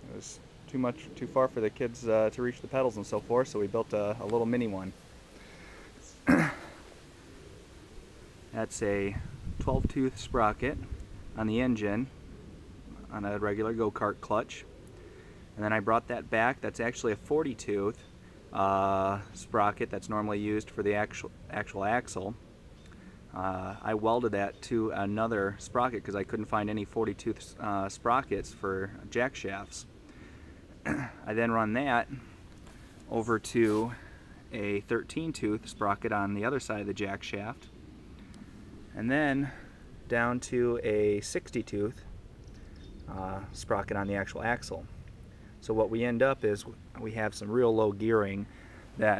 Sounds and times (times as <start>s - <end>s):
Speech: 0.0s - 5.0s, 8.5s - 12.1s, 12.9s - 14.7s, 15.6s - 22.4s, 23.3s - 29.9s, 30.9s - 32.3s, 33.1s - 37.7s, 38.9s - 42.1s, 43.1s - 44.9s, 45.6s - 49.1s.